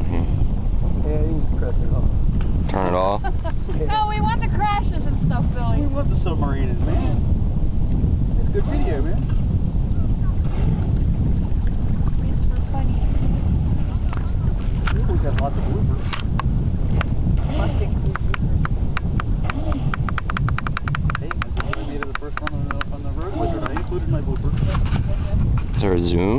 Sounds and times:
Rowboat, canoe, kayak: 0:00.0 - 0:26.3.

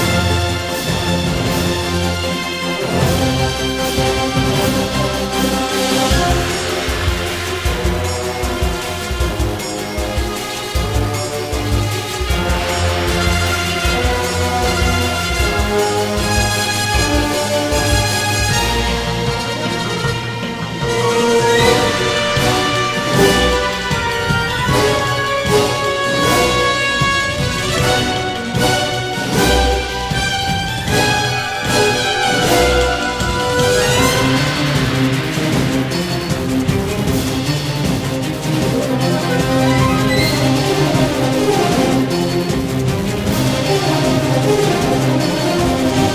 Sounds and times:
Music: 0:00.0 - 0:46.1.

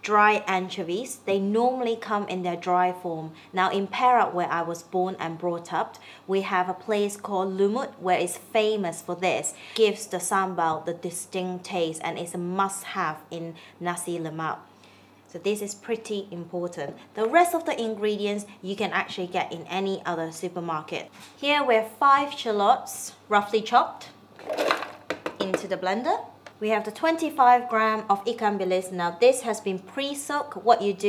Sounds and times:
Speech: 0:00.0 - 0:14.6, 0:15.3 - 0:24.2, 0:25.4 - 0:31.0.

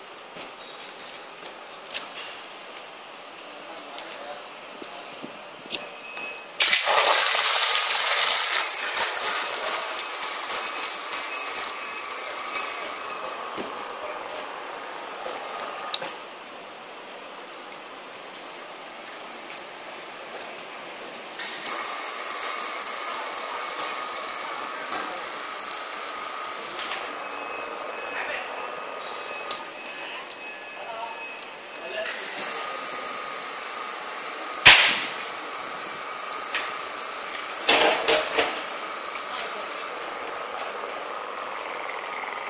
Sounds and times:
Pump (liquid): 0:06.6 - 0:13.2, 0:21.4 - 0:27.2, 0:32.0 - 0:40.2.

